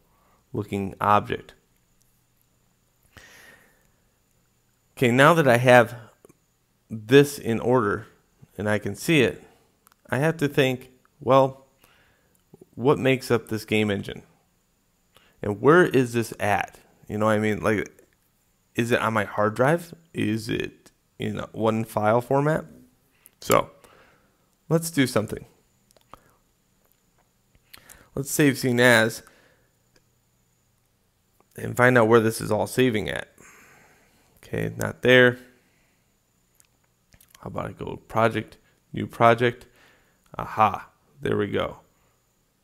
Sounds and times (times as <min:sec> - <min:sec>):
Speech: 0:00.5 - 0:01.6, 0:05.0 - 0:06.2, 0:06.9 - 0:11.6, 0:12.6 - 0:14.3, 0:15.4 - 0:18.0, 0:18.8 - 0:22.8, 0:23.4 - 0:23.8, 0:24.7 - 0:25.6, 0:28.2 - 0:29.3, 0:31.5 - 0:33.4, 0:34.4 - 0:35.5, 0:37.3 - 0:39.7, 0:40.3 - 0:41.9.